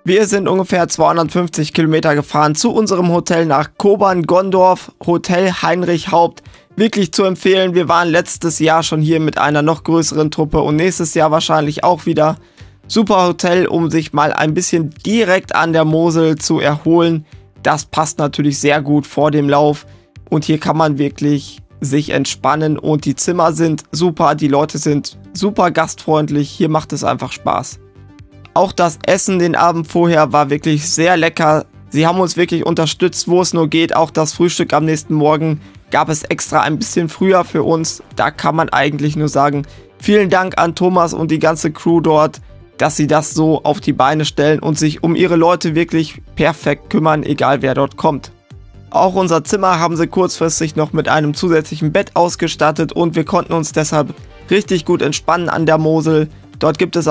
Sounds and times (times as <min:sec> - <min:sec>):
Speech: 0:00.0 - 0:27.8, 0:28.5 - 0:48.3, 0:48.9 - 0:57.1
Music: 0:00.0 - 0:57.1.